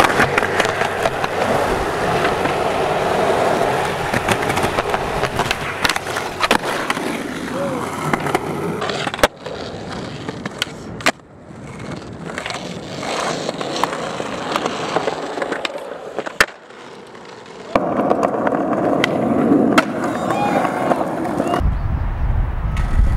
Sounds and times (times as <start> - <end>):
Skateboard: 0.0 - 21.6, 22.7 - 23.1.